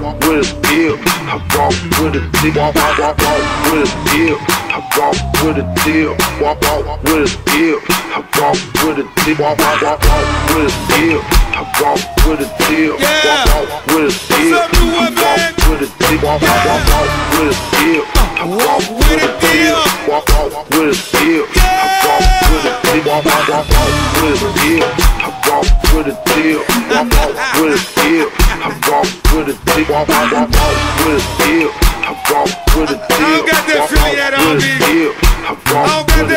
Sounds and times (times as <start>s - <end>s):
Music: 0.0s - 36.3s.